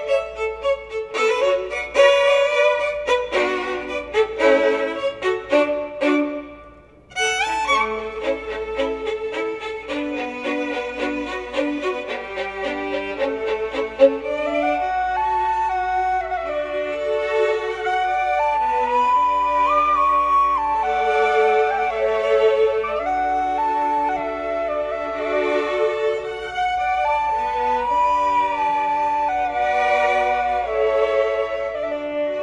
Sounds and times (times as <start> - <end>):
Flute: 0.0 - 32.4
Violin, fiddle: 0.0 - 32.4.